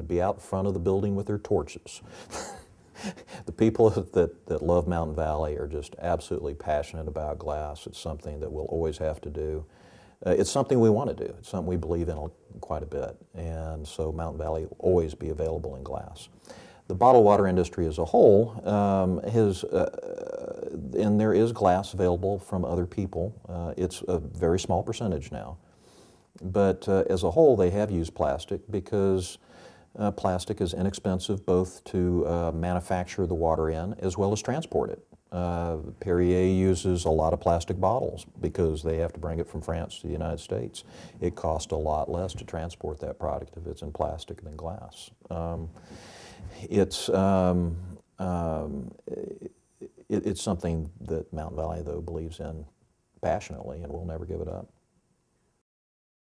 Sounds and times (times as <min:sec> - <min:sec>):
Speech: 0:00.0 - 0:02.1, 0:03.4 - 0:16.3, 0:16.9 - 0:25.6, 0:26.4 - 0:45.8, 0:46.4 - 0:54.7.